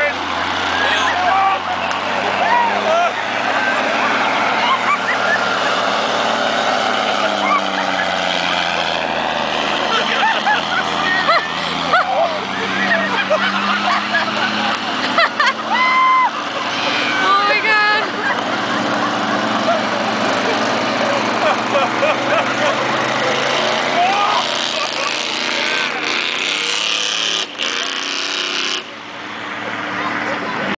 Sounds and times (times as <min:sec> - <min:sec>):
Truck: 0:00.0 - 0:30.7.